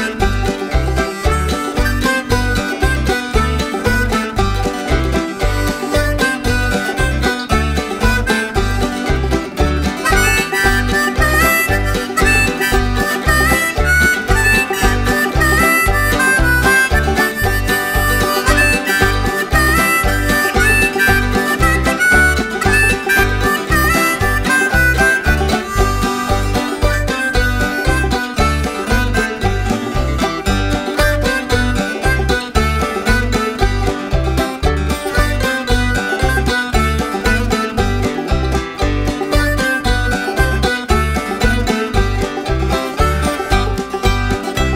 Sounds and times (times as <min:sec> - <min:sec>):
Bluegrass: 0:00.0 - 0:44.7.